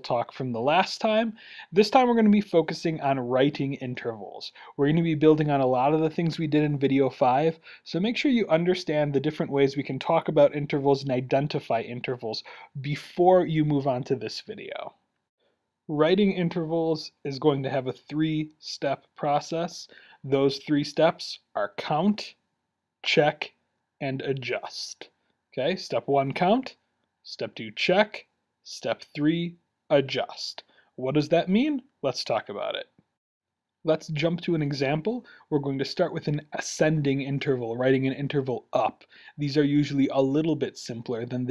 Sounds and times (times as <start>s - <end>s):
Speech: 0.0s - 15.0s, 15.9s - 22.4s, 23.0s - 33.0s, 33.9s - 41.5s.